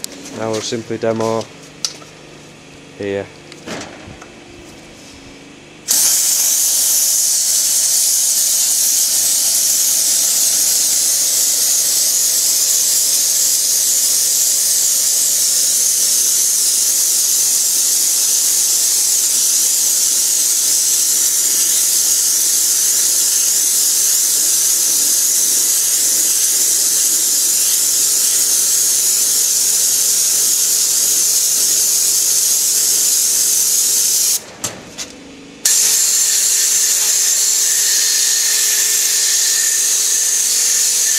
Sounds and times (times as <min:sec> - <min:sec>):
Hiss: 0:05.9 - 0:34.4, 0:35.7 - 0:41.1.